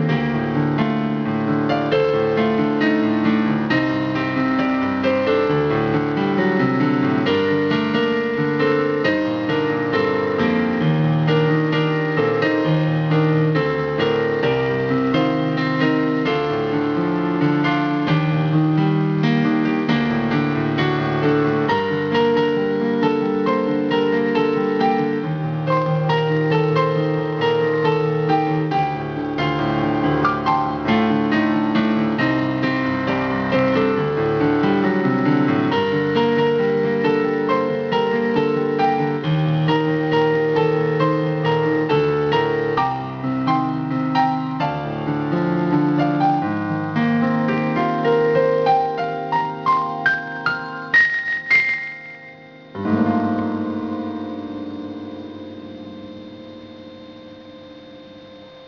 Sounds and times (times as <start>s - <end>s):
Inside, small room: 0.0s - 58.6s
Piano: 0.0s - 58.6s.